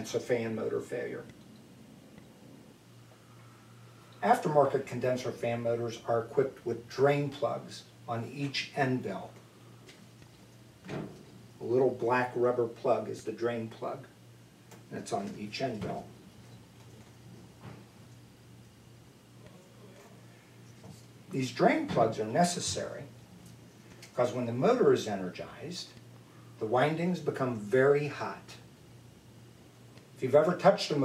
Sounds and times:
Speech: 0.0 - 1.3, 4.2 - 9.4, 11.6 - 14.2, 14.9 - 16.2, 21.3 - 23.1, 24.2 - 26.0, 26.6 - 28.7, 30.2 - 31.0.

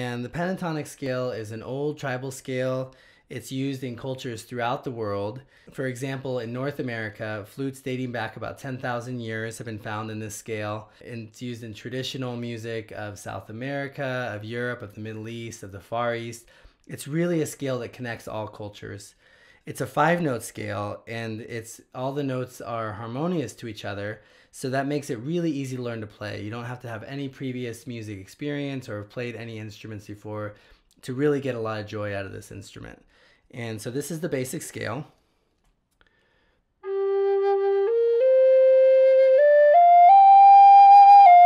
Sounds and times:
Speech: 0.0 - 35.2.

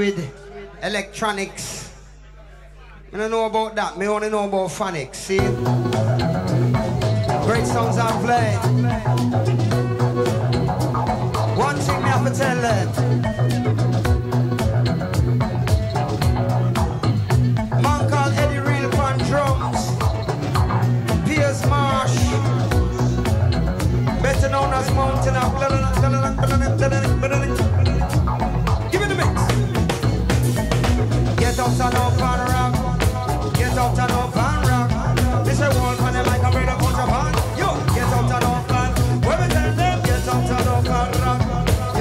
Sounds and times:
Speech: 0.0 - 5.5, 7.4 - 9.2, 11.6 - 13.0, 17.8 - 20.0, 21.2 - 22.6, 24.2 - 27.7, 28.9 - 29.7
Music: 5.0 - 42.0.

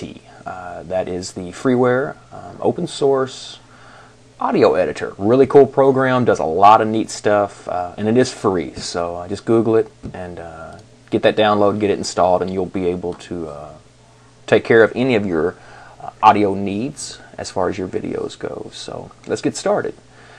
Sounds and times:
Speech: 0.0 - 3.7, 4.4 - 13.9, 14.5 - 20.0.

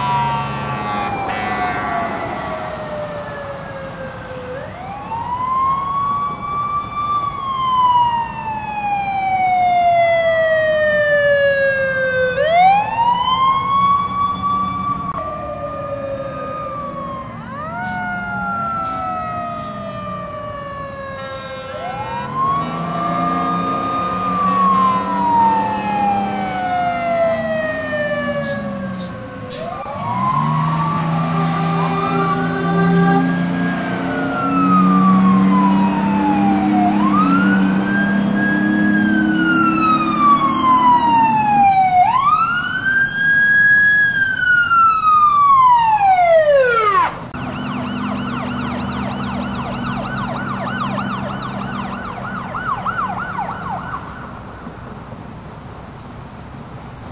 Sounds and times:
Fire engine, fire truck (siren): 0.0 - 57.1
Police car (siren): 0.0 - 57.1.

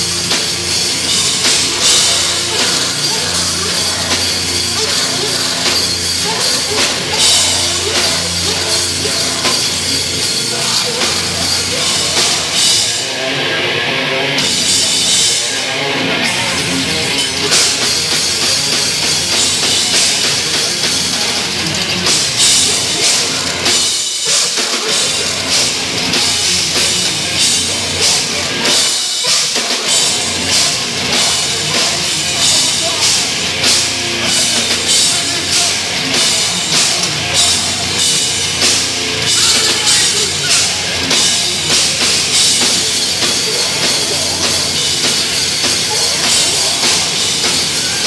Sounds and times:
Music: 0.0 - 48.0.

